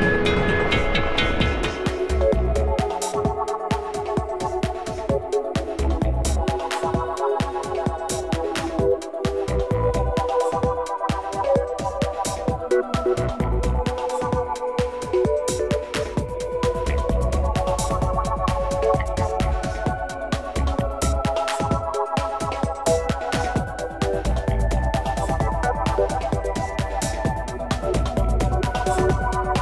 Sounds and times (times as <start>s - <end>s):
Music: 0.0s - 29.6s.